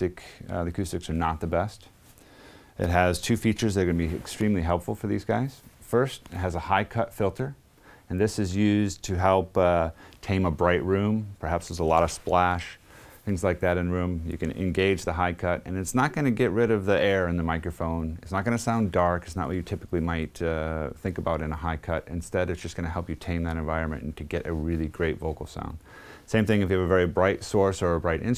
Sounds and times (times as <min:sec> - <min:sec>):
Speech: 0:00.0 - 0:02.0, 0:02.8 - 0:28.3.